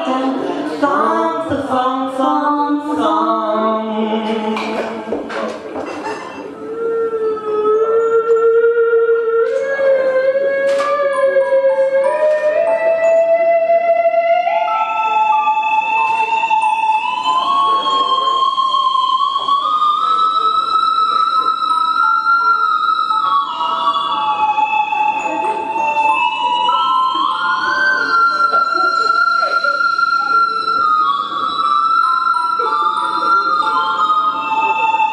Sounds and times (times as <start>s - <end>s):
Marimba, xylophone: 10.7s - 35.1s
Glockenspiel: 11.1s - 35.1s.